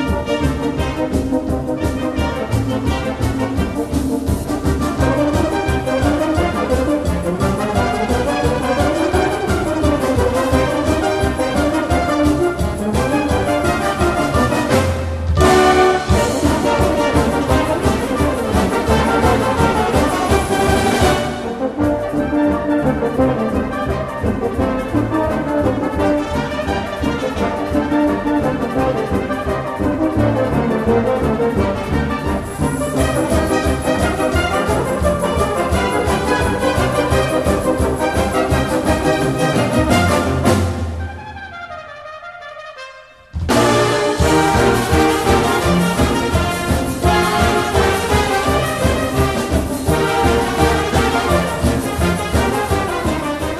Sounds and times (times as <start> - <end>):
Music: 0.0 - 53.5.